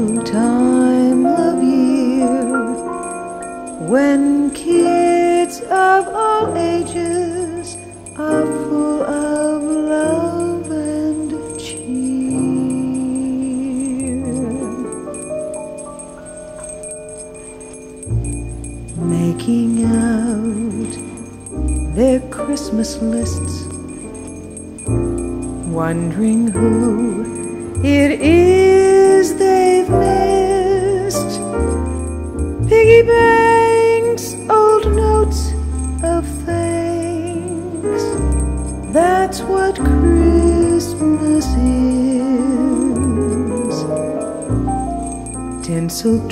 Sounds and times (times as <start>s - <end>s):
Jingle bell: 0.0s - 46.3s.